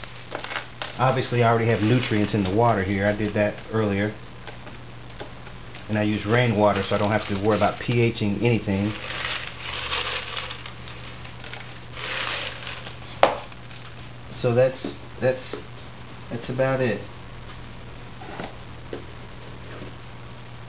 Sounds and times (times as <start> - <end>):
Speech: 1.0 - 4.2, 5.9 - 9.0, 14.3 - 15.6, 16.3 - 17.1.